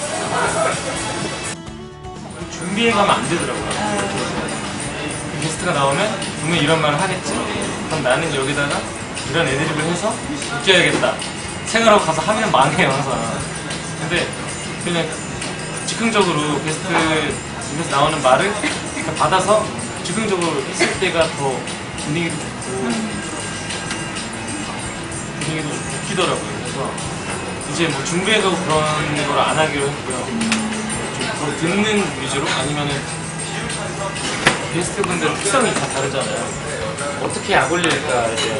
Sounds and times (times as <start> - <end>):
Music: 0.0 - 38.5
Speech: 2.4 - 13.4, 15.9 - 23.3, 27.7 - 38.5.